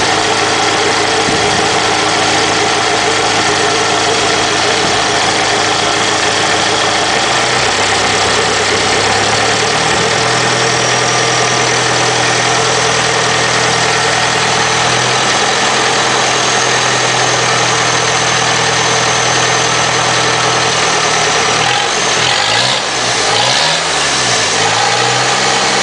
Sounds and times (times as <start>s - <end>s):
Engine: 0.0s - 25.8s
Vehicle: 0.0s - 25.8s.